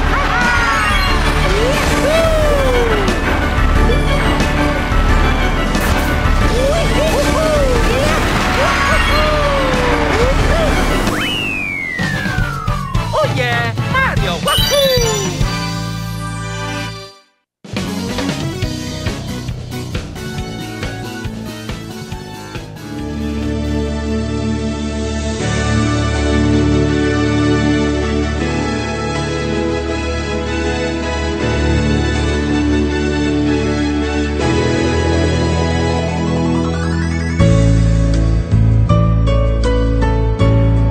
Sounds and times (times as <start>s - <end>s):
Background music: 0.0s - 40.9s.